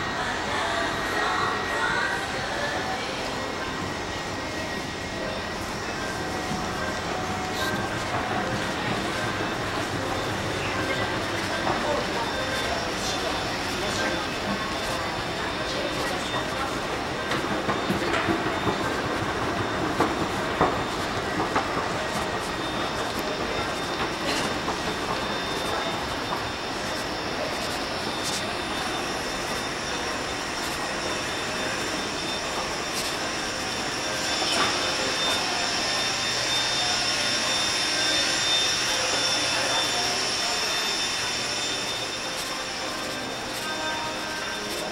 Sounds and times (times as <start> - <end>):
Inside, public space: 0.0 - 44.9
Speech: 0.0 - 44.9.